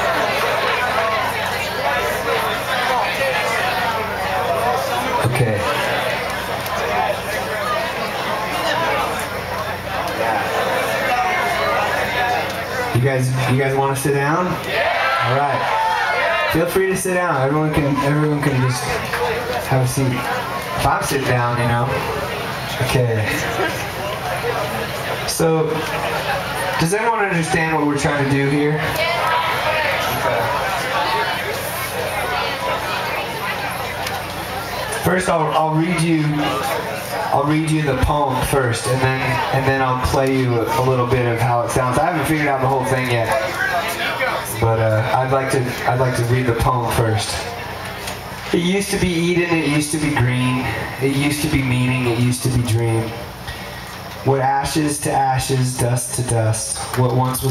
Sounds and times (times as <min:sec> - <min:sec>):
Speech: 0:02.2 - 0:06.0, 0:06.8 - 0:14.6, 0:15.2 - 0:15.7, 0:16.5 - 0:23.8, 0:25.2 - 0:34.0, 0:34.9 - 0:47.6, 0:48.5 - 0:53.3, 0:54.2 - 0:57.5.